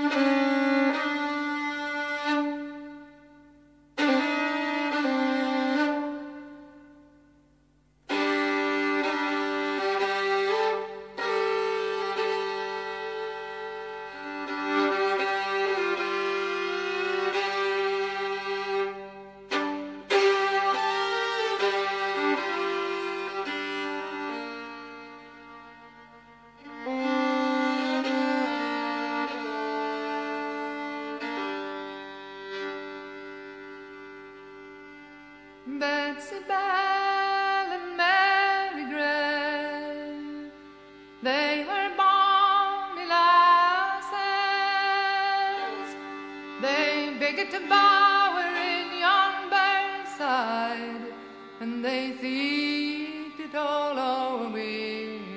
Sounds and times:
Music: 0:00.0 - 0:55.3.

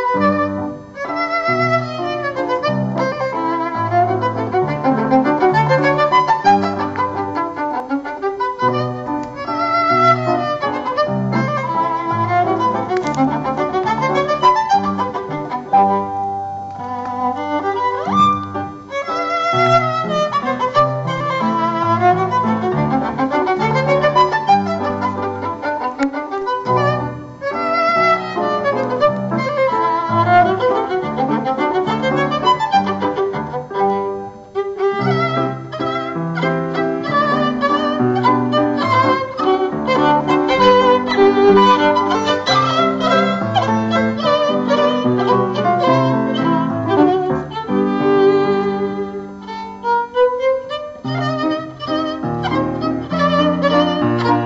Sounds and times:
Piano: 0:00.0 - 0:54.4
Violin, fiddle: 0:00.0 - 0:54.4.

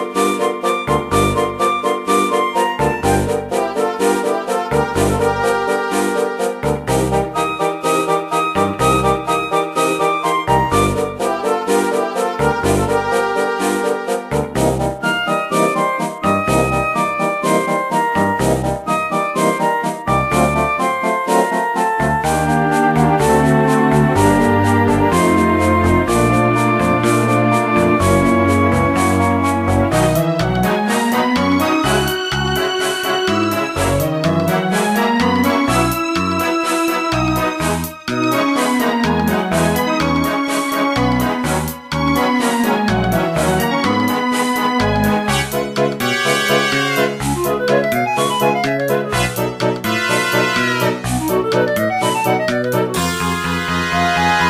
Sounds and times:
Background music: 0:00.0 - 0:54.4.

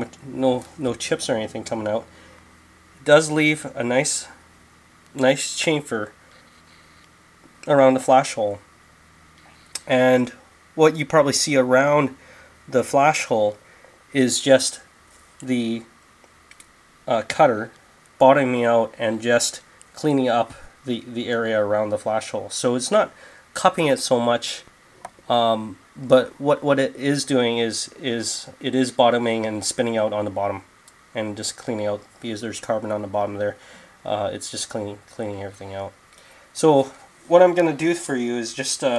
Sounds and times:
Speech: 0:00.0 - 0:02.1, 0:03.0 - 0:04.4, 0:05.2 - 0:06.2, 0:07.6 - 0:08.6, 0:09.8 - 0:15.9, 0:17.1 - 0:24.7, 0:25.3 - 0:36.0, 0:36.6 - 0:38.9.

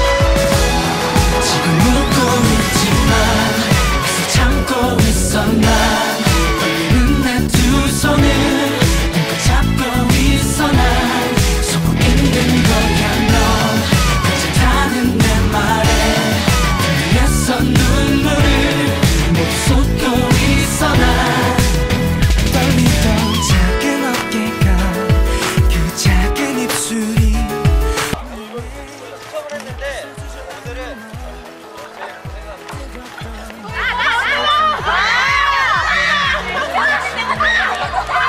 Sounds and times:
Independent music: 0:00.0 - 0:38.2.

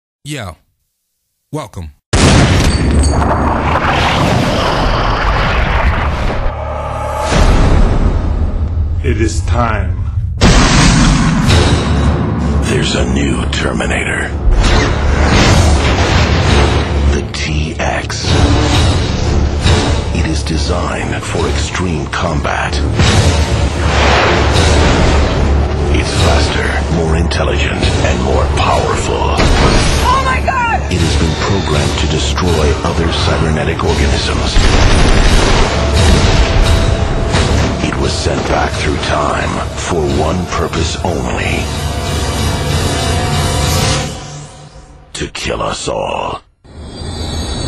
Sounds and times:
Speech: 0:00.2 - 0:00.6, 0:01.5 - 0:02.0, 0:09.0 - 0:10.0, 0:12.6 - 0:14.4, 0:17.1 - 0:18.3, 0:20.2 - 0:22.9, 0:30.0 - 0:34.6, 0:37.8 - 0:41.7, 0:45.2 - 0:46.5.

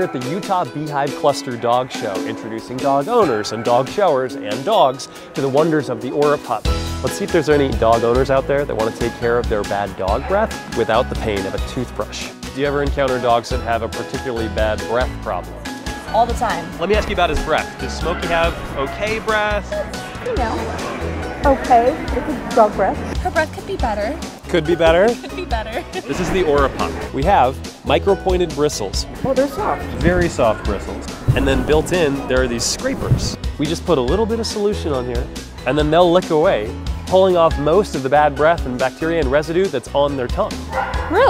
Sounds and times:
Speech: 0:00.0 - 0:15.4, 0:26.1 - 0:40.5
Music: 0:00.0 - 0:41.2.

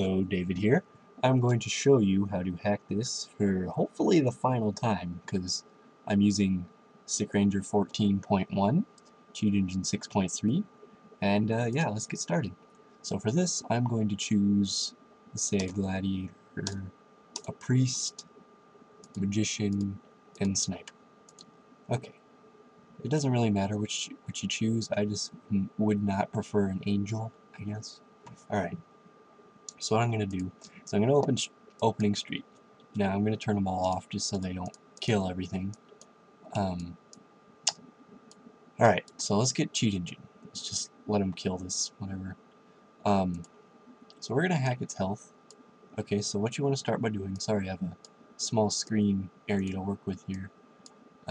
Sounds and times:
Speech: 0:00.0 - 0:18.2, 0:19.2 - 0:20.9, 0:21.9 - 0:22.1, 0:23.0 - 0:28.8, 0:29.7 - 0:32.4, 0:33.0 - 0:35.8, 0:36.5 - 0:37.0, 0:38.8 - 0:42.4, 0:43.1 - 0:43.5, 0:44.2 - 0:45.2, 0:46.0 - 0:50.5.

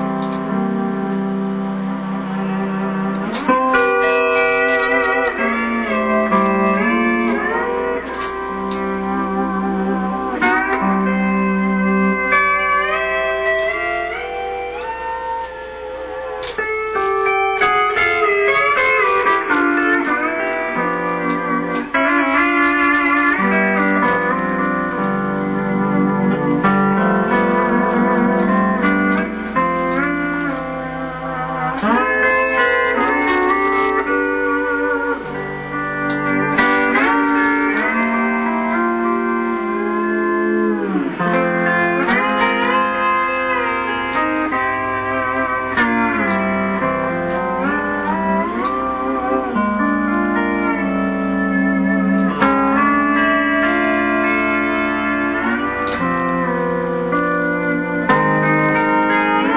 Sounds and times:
Steel guitar, slide guitar: 0:00.0 - 0:59.5.

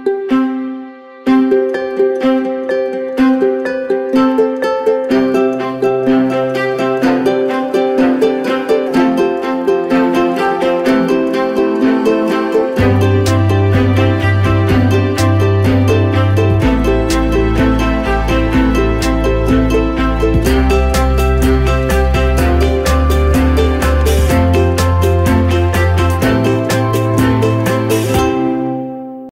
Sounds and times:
Music: 0:00.0 - 0:29.3.

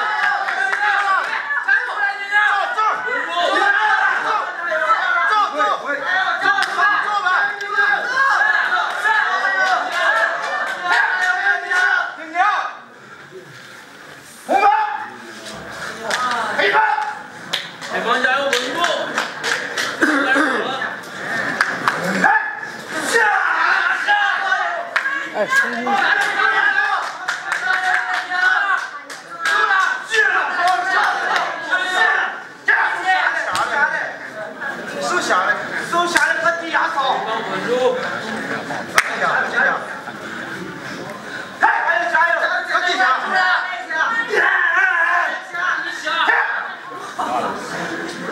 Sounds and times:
Inside, large room or hall: 0:00.0 - 0:48.3
Speech: 0:23.0 - 0:48.3.

